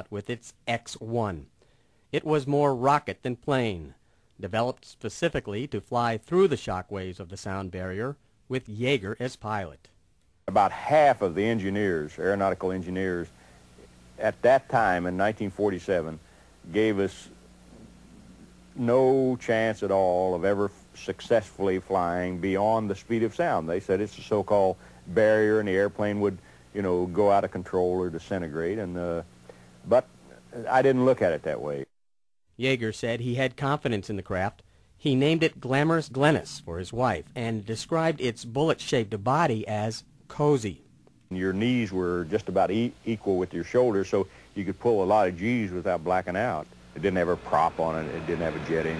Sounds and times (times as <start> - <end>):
Speech: 0.0 - 1.5, 2.2 - 13.3, 14.2 - 17.4, 18.8 - 29.3, 29.9 - 32.0, 32.6 - 48.9.